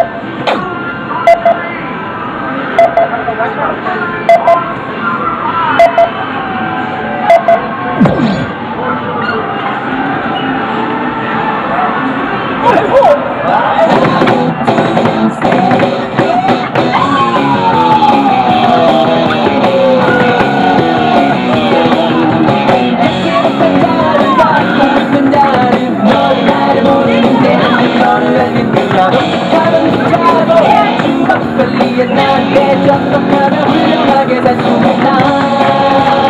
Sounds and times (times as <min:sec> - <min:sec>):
Music: 0:13.8 - 0:36.2.